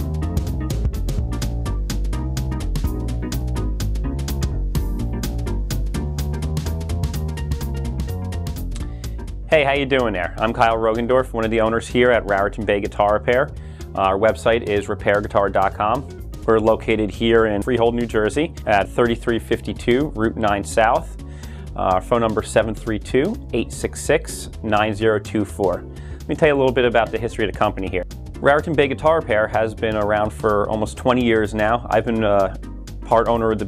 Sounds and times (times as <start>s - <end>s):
Music: 0.0s - 33.6s
Speech: 9.5s - 21.1s, 21.8s - 33.6s.